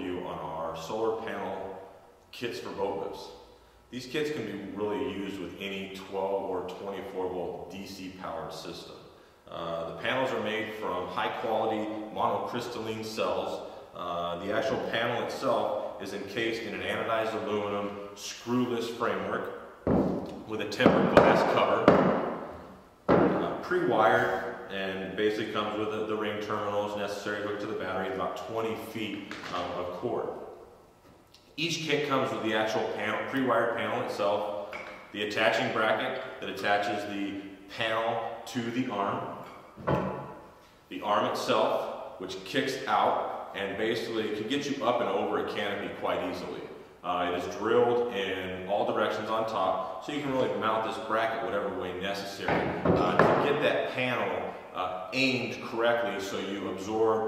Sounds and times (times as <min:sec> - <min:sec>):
Speech: 0:00.0 - 0:19.5, 0:20.3 - 0:22.1, 0:23.2 - 0:30.4, 0:31.6 - 0:39.4, 0:40.9 - 0:57.2.